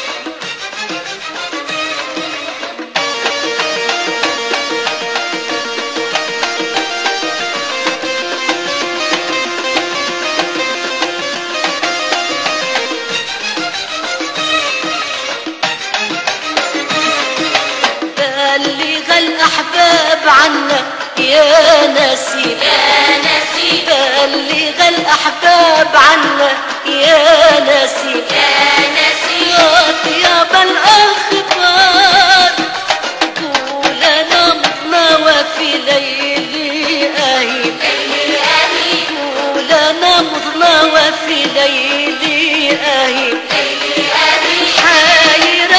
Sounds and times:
Theme music: 0.0s - 18.1s.

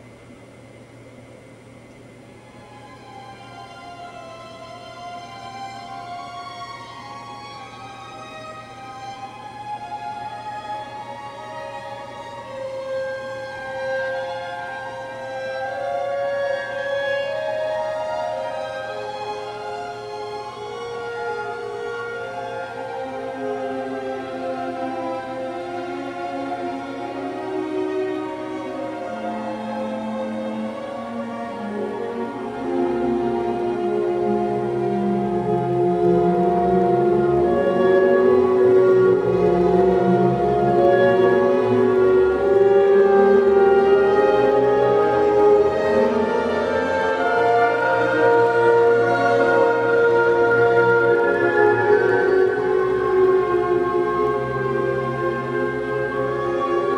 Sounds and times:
Orchestra: 1.4s - 56.9s.

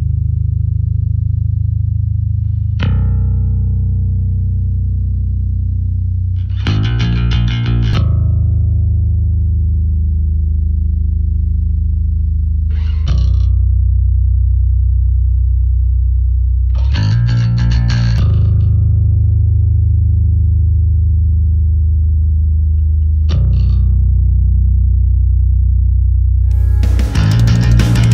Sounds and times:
Bass guitar: 0.0s - 28.1s
Distortion: 0.0s - 28.1s.

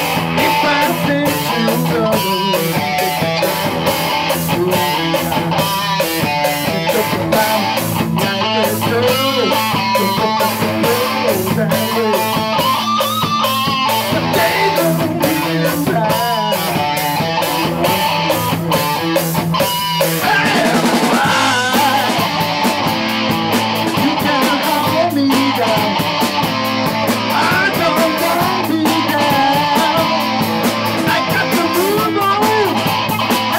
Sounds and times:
Electric guitar: 0.0s - 33.5s.

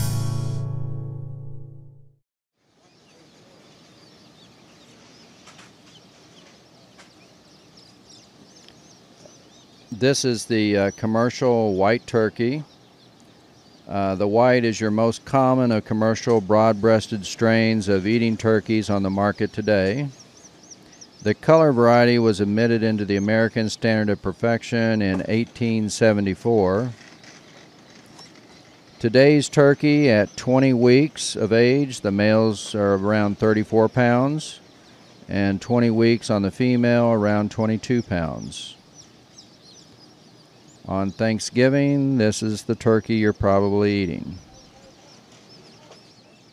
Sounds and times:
Bird: 2.6s - 46.5s
Speech: 9.9s - 12.7s, 13.9s - 20.2s, 21.2s - 27.0s, 29.0s - 34.6s, 35.3s - 38.8s, 40.9s - 45.2s, 45.8s - 46.0s.

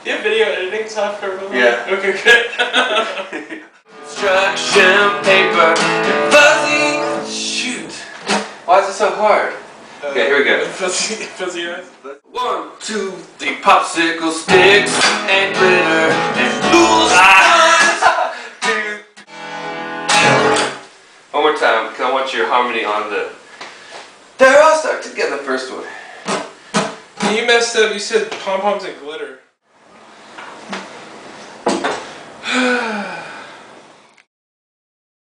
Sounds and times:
Speech: 0.0s - 2.5s, 7.4s - 8.1s, 8.7s - 14.5s, 21.3s - 23.4s, 24.4s - 26.0s, 27.2s - 29.5s.

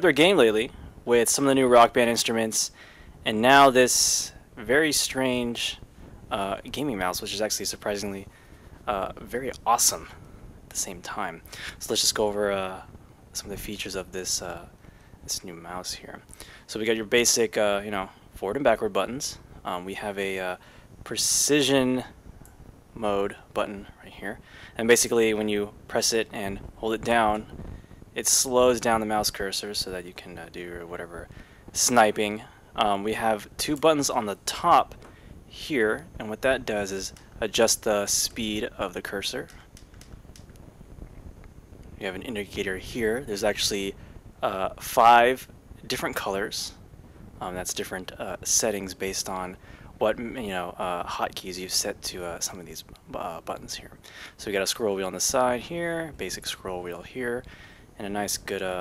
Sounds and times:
Speech: 0.0s - 14.7s, 15.3s - 22.2s, 23.0s - 27.5s, 28.2s - 39.6s, 42.0s - 46.8s, 47.4s - 58.8s.

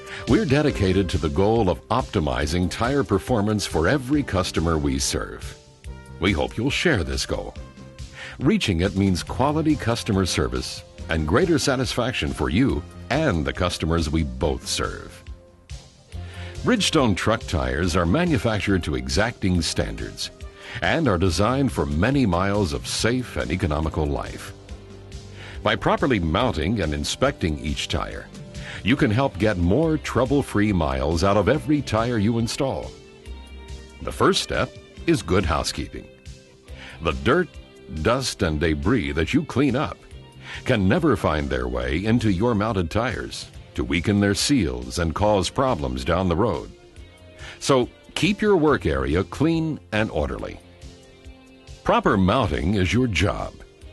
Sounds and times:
Music: 0.0s - 53.9s
Speech: 0.2s - 5.6s, 6.2s - 7.6s, 8.3s - 15.2s, 16.6s - 24.6s, 25.6s - 33.0s, 34.0s - 36.1s, 37.0s - 40.0s, 40.6s - 46.8s, 47.6s - 50.6s, 51.8s - 53.7s.

